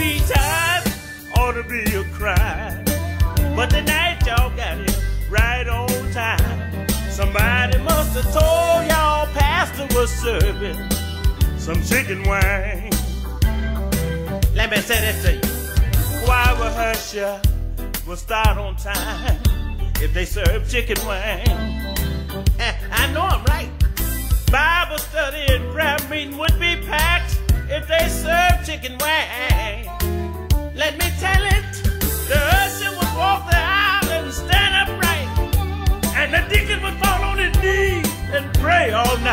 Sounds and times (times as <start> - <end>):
Music: 0.0 - 39.3.